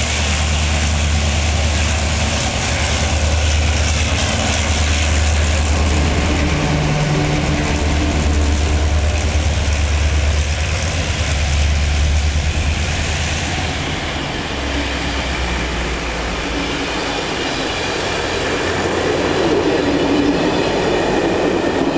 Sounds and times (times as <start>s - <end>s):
Railroad car, train wagon: 0.0s - 21.9s
Train: 0.0s - 21.9s.